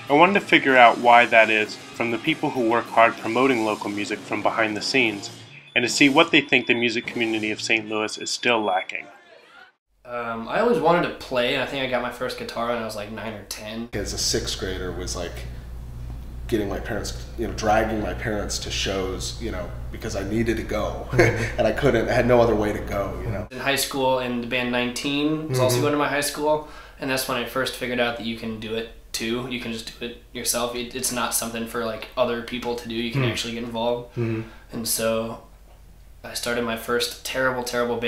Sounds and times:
Speech: 0.0 - 15.5, 16.5 - 35.5, 36.3 - 38.0.

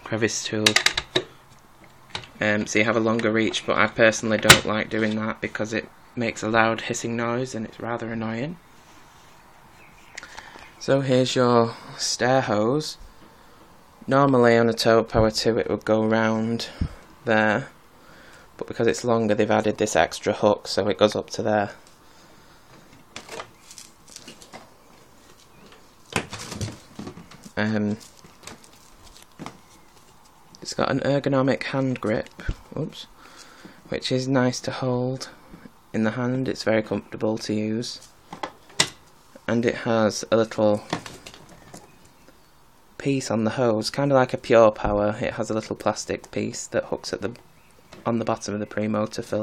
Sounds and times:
Speech: 0.0 - 0.8, 2.4 - 8.6, 10.8 - 13.0, 14.1 - 17.8, 18.6 - 21.8, 27.6 - 28.1, 30.6 - 33.1, 33.9 - 38.1, 39.4 - 41.0, 43.0 - 47.4, 48.0 - 49.4.

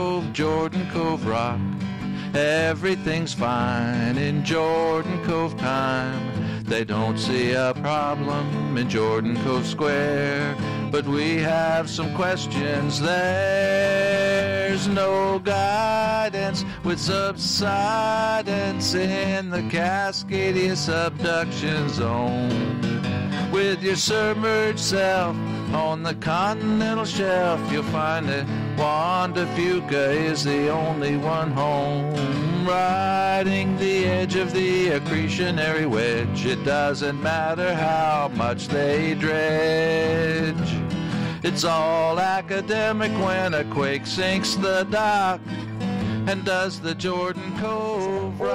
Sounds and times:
Music: 0.0 - 48.5.

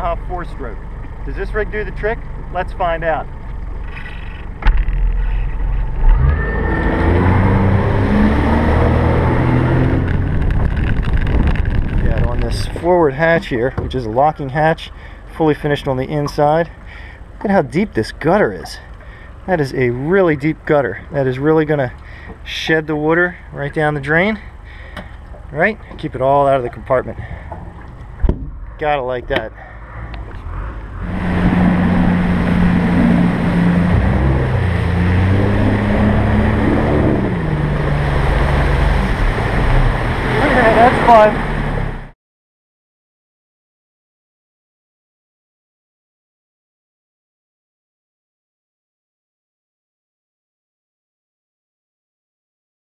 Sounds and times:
Speech: 0.0 - 3.3, 12.0 - 16.8, 17.4 - 18.9, 19.5 - 24.4, 25.5 - 27.2, 28.8 - 29.6, 40.4 - 41.4
Motorboat, speedboat: 0.0 - 42.2.

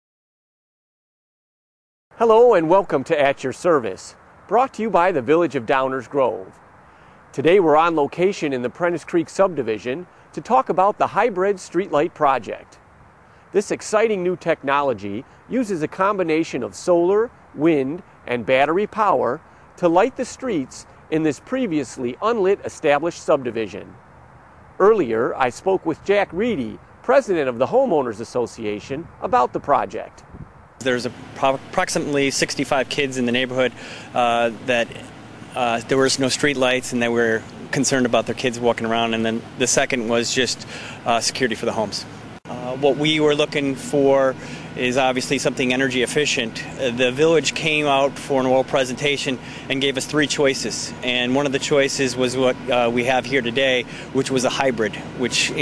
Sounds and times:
Speech: 2.2 - 6.6, 7.4 - 12.8, 13.6 - 24.0, 24.8 - 30.2, 30.8 - 55.6.

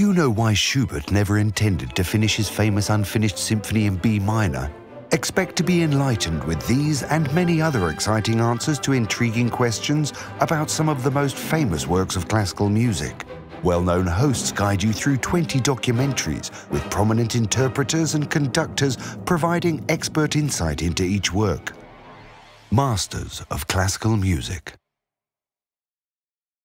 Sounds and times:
Speech: 0.0 - 21.8, 22.7 - 24.8
Classical music: 0.9 - 23.8.

